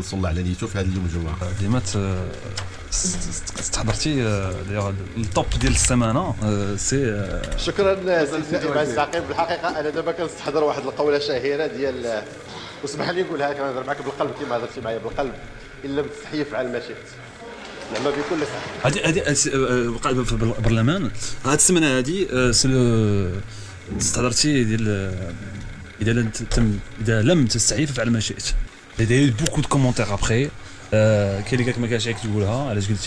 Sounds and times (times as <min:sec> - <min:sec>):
Speech: 0:00.0 - 0:17.2, 0:17.9 - 0:33.0.